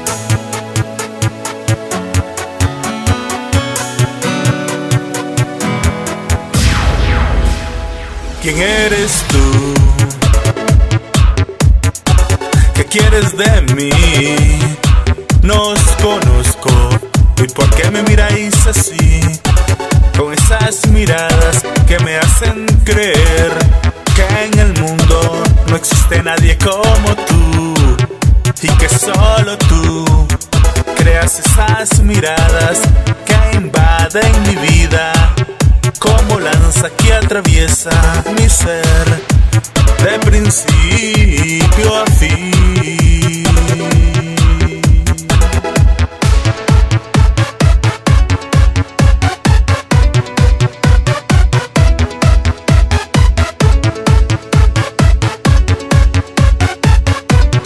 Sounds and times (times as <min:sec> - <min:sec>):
Electronica: 0:00.0 - 0:57.6.